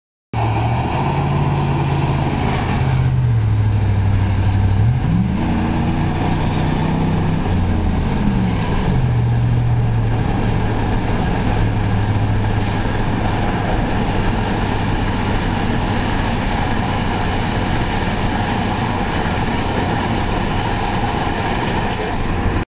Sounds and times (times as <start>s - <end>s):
Car: 0.4s - 22.6s.